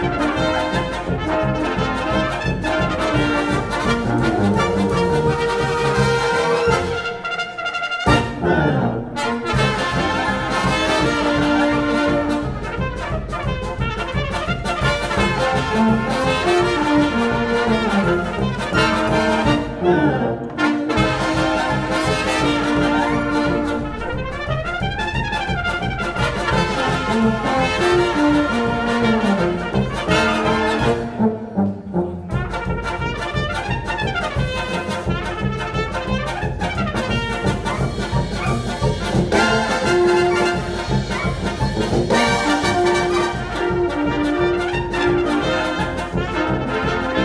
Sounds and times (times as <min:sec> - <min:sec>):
Music: 0:00.0 - 0:47.2.